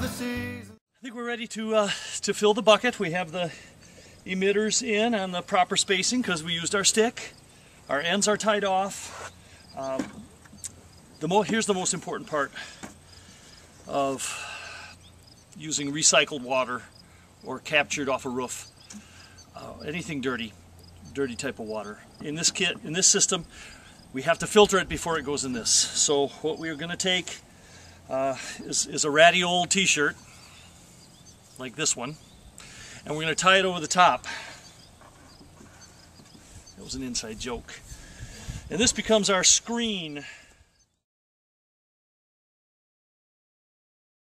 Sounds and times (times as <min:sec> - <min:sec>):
Speech: 0:04.3 - 0:09.0, 0:11.2 - 0:12.6, 0:15.6 - 0:16.9, 0:17.5 - 0:18.7, 0:19.6 - 0:23.5, 0:24.2 - 0:27.4, 0:31.6 - 0:32.2, 0:33.1 - 0:34.3, 0:36.8 - 0:37.8, 0:38.7 - 0:40.2.